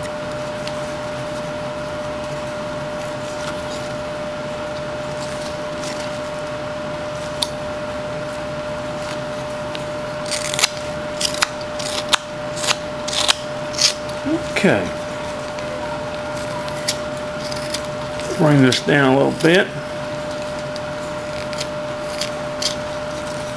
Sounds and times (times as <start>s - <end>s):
Scissors: 9.0s - 14.2s, 16.4s - 19.5s, 20.3s - 23.5s.